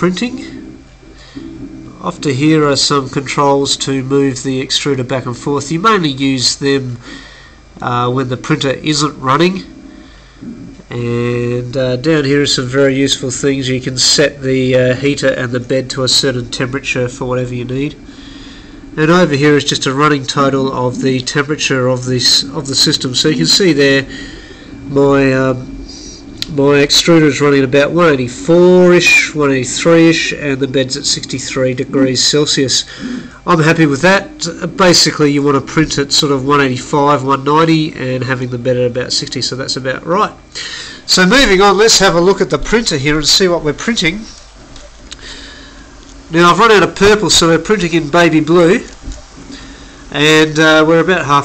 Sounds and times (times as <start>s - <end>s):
Speech: 0.0s - 0.8s, 1.4s - 7.1s, 7.8s - 9.8s, 10.4s - 18.1s, 19.0s - 44.4s, 46.3s - 49.0s, 50.1s - 51.4s.